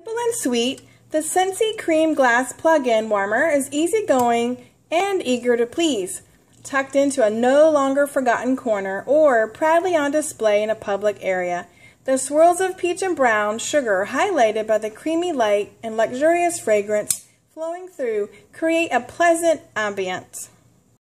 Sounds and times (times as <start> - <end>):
Speech: 0.0 - 20.6.